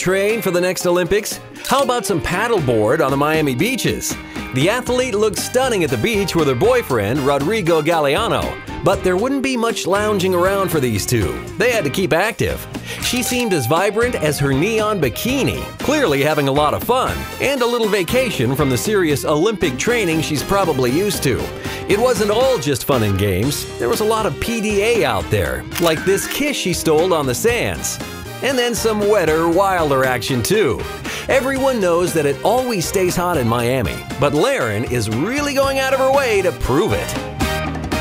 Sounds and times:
Speech: 0.0s - 37.2s
Music: 0.0s - 38.0s.

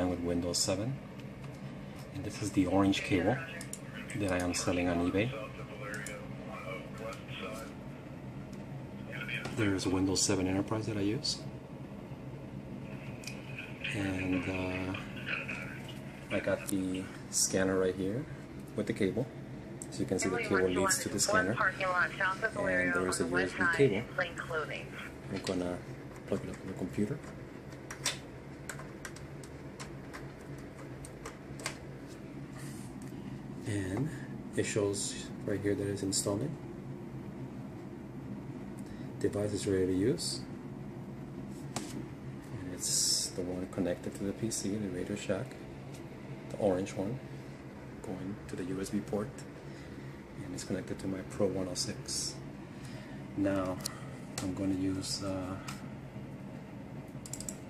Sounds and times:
Speech: 2.2s - 7.8s, 9.1s - 11.5s, 13.5s - 19.3s, 19.9s - 27.2s, 33.6s - 36.6s, 42.6s - 45.5s, 48.0s - 49.4s, 50.4s - 52.4s, 53.4s - 55.7s.

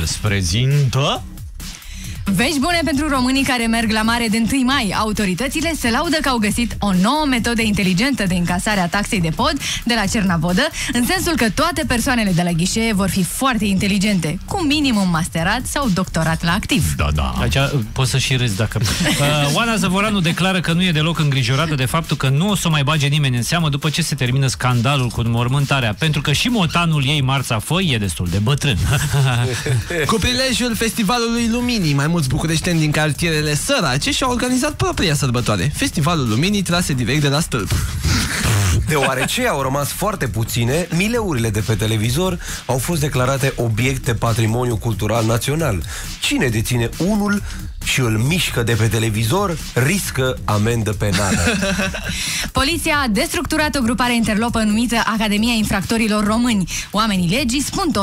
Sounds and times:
Speech: 0.0s - 1.3s, 2.3s - 28.8s, 29.4s - 37.7s, 38.8s - 51.3s, 52.6s - 58.0s
Music: 0.0s - 58.0s.

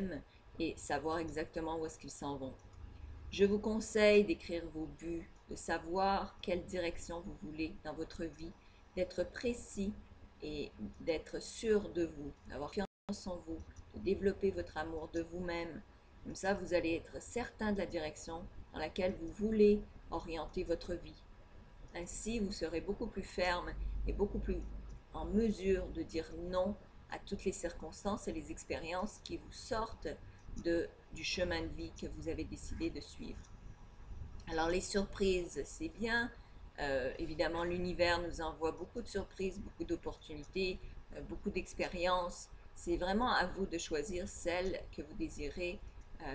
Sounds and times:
Speech: 0.0s - 2.6s, 3.4s - 21.2s, 22.0s - 33.4s, 34.5s - 46.3s.

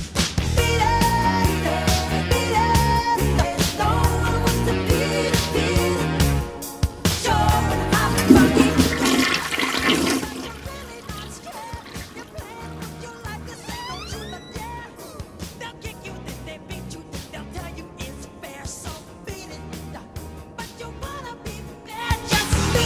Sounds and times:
Toilet flush: 7.9s - 12.8s
Water: 8.0s - 13.4s.

